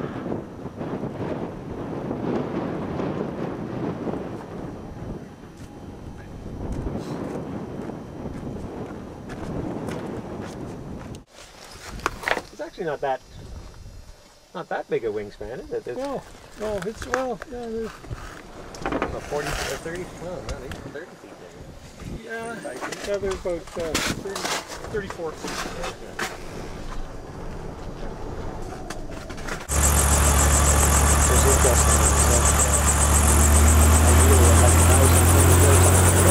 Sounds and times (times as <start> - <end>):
Speech: 12.5 - 13.4, 14.6 - 18.0, 19.0 - 26.2, 31.2 - 32.8, 34.0 - 36.3.